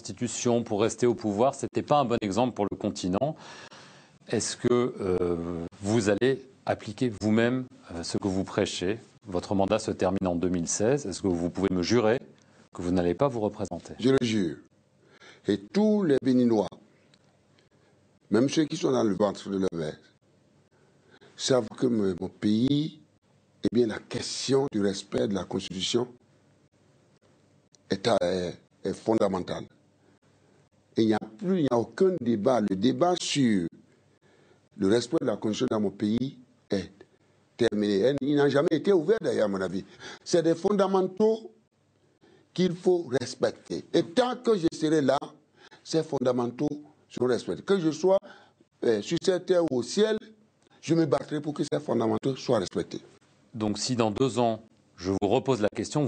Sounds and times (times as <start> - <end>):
Speech: 0.0 - 3.4, 4.3 - 14.7, 15.4 - 16.8, 18.3 - 20.2, 21.4 - 26.2, 27.9 - 29.8, 31.0 - 33.8, 34.8 - 41.6, 42.6 - 56.0.